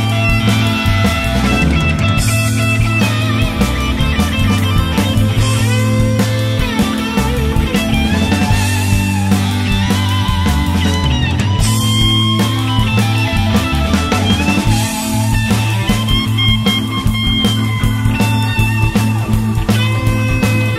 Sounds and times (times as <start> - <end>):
Guitar: 0.0 - 20.7
Psychedelic rock: 0.0 - 20.7.